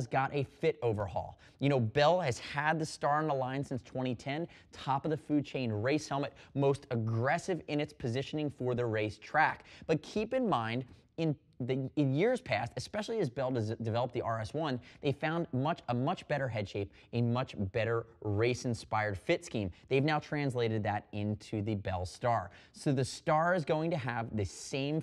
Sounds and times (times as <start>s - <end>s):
Speech: 0.0s - 25.0s.